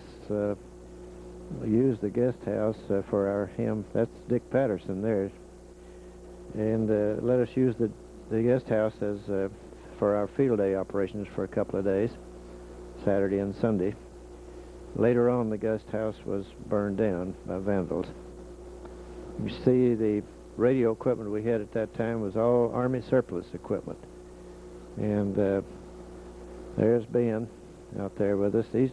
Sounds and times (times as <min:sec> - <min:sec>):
Speech: 0:00.0 - 0:00.6, 0:01.5 - 0:05.4, 0:06.5 - 0:12.2, 0:13.0 - 0:14.0, 0:15.0 - 0:18.2, 0:19.4 - 0:24.1, 0:25.0 - 0:25.8, 0:26.8 - 0:28.9.